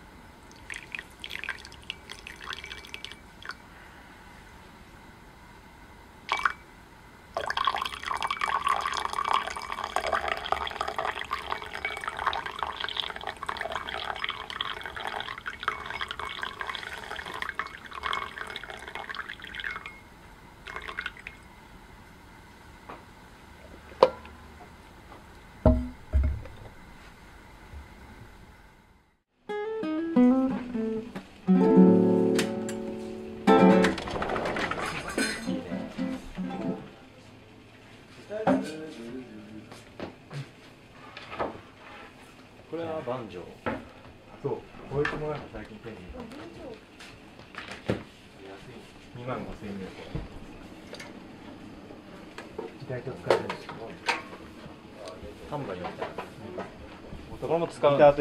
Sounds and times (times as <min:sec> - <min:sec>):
Music: 0:29.4 - 0:34.0, 0:35.4 - 0:36.9.